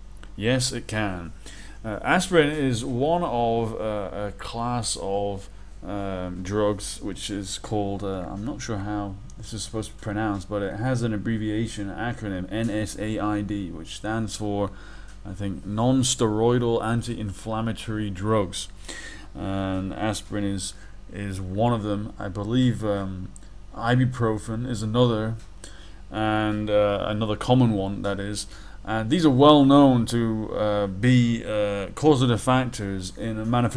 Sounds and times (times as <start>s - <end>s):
Speech: 0.4s - 18.8s, 19.4s - 25.5s, 26.1s - 33.7s.